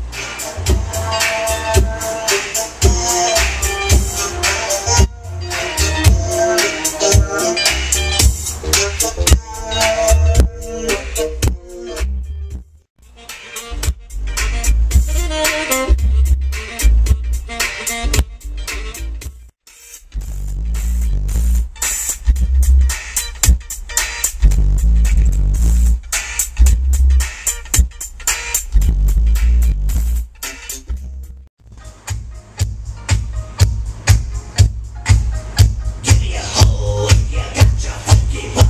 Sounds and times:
Music: 0.0 - 38.7.

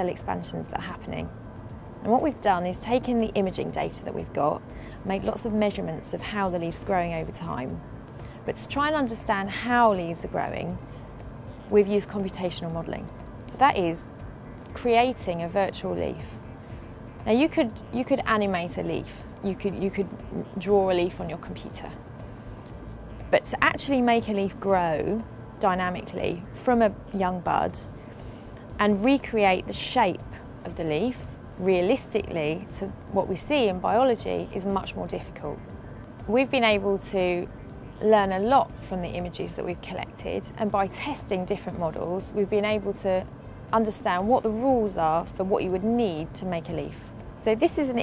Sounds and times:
Speech: 0.0 - 1.3, 2.0 - 7.8, 8.5 - 10.8, 11.7 - 14.1, 14.8 - 16.3, 17.3 - 22.0, 23.3 - 27.9, 28.8 - 35.6, 36.3 - 48.0
Music: 0.0 - 48.0.

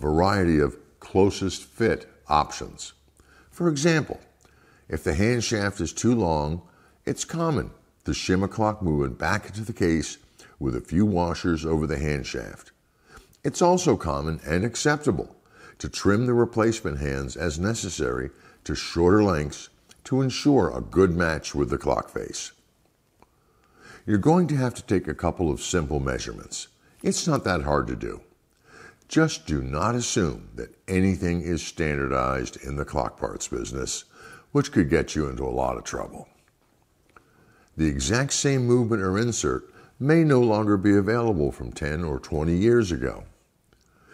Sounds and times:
Speech: 0.0 - 12.8, 13.4 - 22.6, 24.0 - 28.4, 29.1 - 36.4, 37.8 - 43.4.

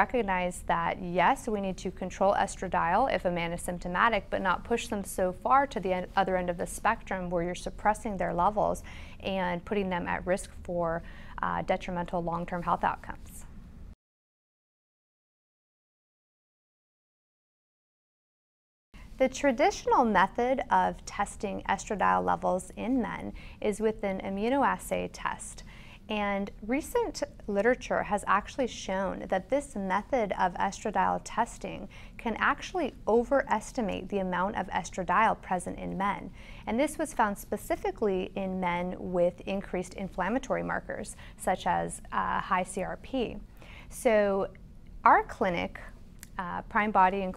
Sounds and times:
Speech: 0.0 - 13.4, 19.2 - 47.3.

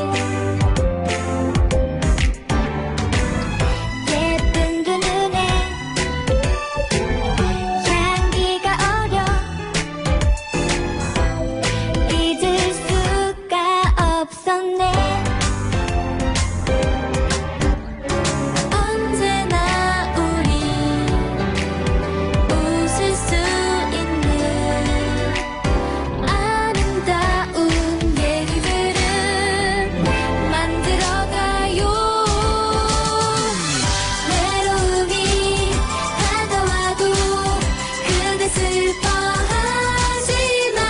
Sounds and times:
Music: 0.0 - 40.9.

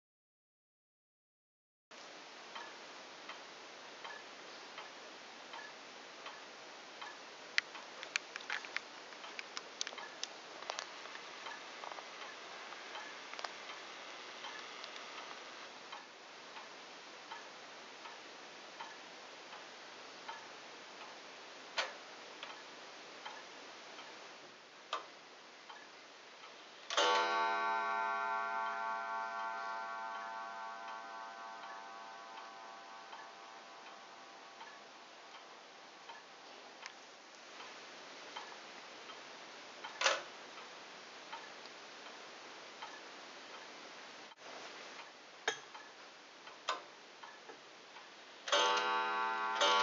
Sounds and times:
Tick-tock: 2.6 - 3.4, 4.0 - 11.6, 18.8 - 21.2, 21.8 - 24.2, 25.7 - 37.0, 41.3 - 42.2.

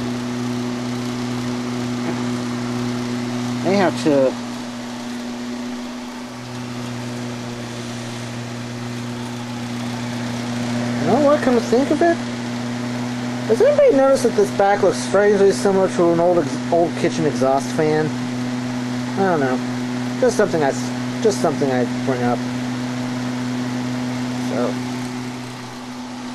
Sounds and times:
Mechanical fan: 0.0 - 26.3
Speech: 3.6 - 4.4, 11.0 - 12.2, 13.5 - 18.2, 19.2 - 22.4, 24.4 - 24.8.

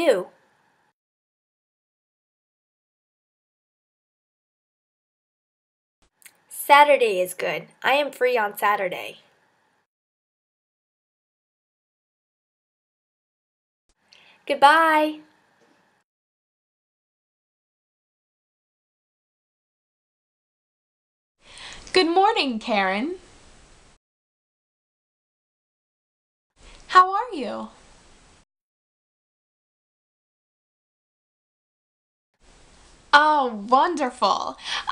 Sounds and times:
Speech: 0.0 - 0.3, 6.5 - 9.2, 14.5 - 15.3, 21.9 - 23.2, 26.9 - 27.8, 33.2 - 34.9.

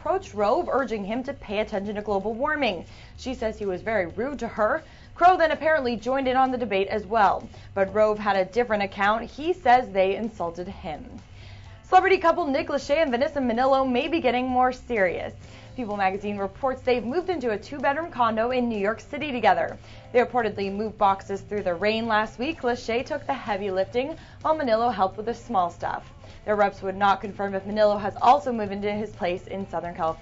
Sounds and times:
Speech: 0.0 - 11.2, 11.9 - 30.2.

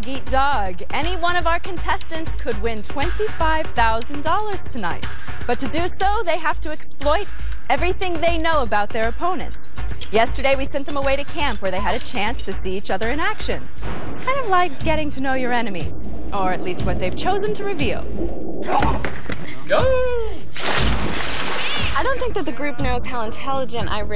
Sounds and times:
Speech: 0.0 - 4.9, 5.5 - 13.6, 14.2 - 18.0, 22.0 - 24.1
Music: 0.0 - 24.1.

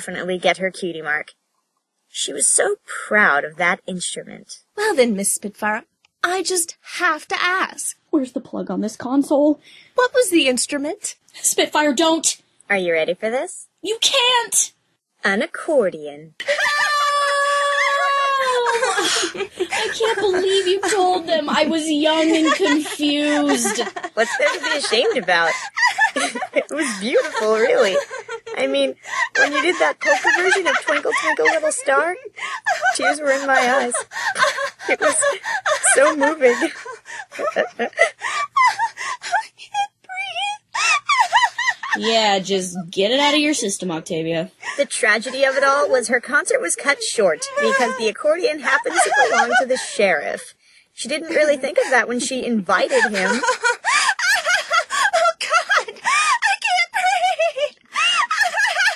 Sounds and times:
Speech: 0.0 - 1.3, 2.2 - 19.0, 19.7 - 25.6, 26.5 - 34.1, 34.9 - 36.8, 39.8 - 40.6, 41.9 - 53.6, 56.4 - 57.6.

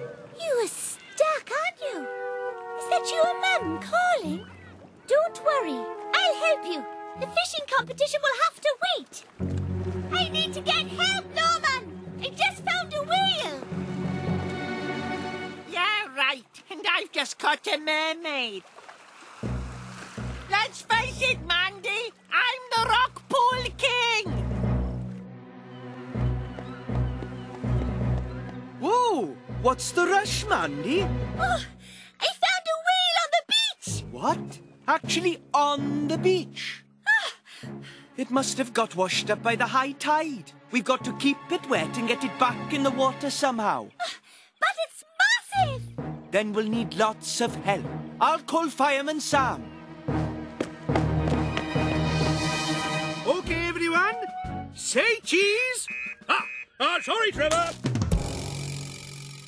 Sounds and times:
Music: 1.8 - 8.4, 9.2 - 15.8, 19.4 - 21.9, 22.7 - 32.1, 33.8 - 43.9, 45.6 - 55.3, 57.4 - 58.8
Speech: 15.7 - 18.6, 20.5 - 24.3, 32.2 - 36.8, 44.6 - 49.6, 53.3 - 57.8.

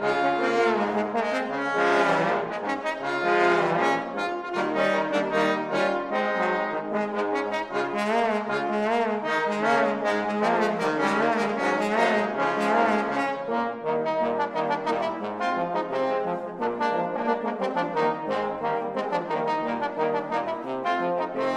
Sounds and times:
Trombone: 0.0 - 21.5.

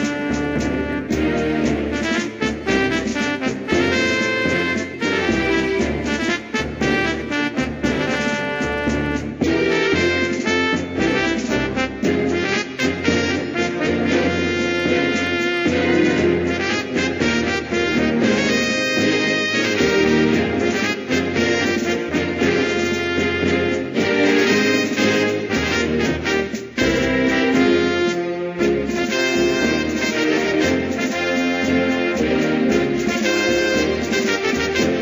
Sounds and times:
Music: 0.0 - 35.0.

